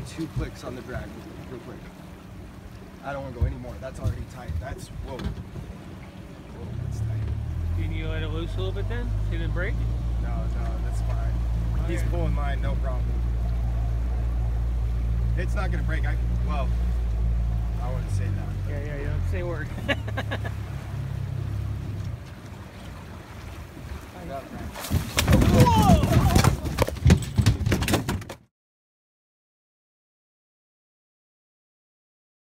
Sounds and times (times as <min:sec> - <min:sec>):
Speech: 0:00.0 - 0:01.9, 0:03.0 - 0:05.3, 0:06.6 - 0:13.1, 0:15.4 - 0:16.7, 0:24.2 - 0:24.8
Boat, Water vehicle: 0:00.0 - 0:28.5.